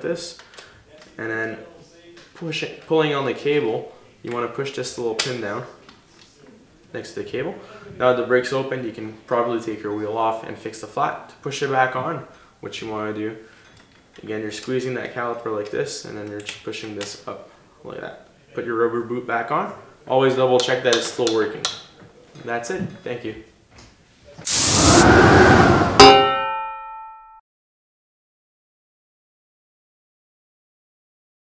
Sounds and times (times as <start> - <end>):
Speech: 0.0 - 13.4, 14.2 - 23.5.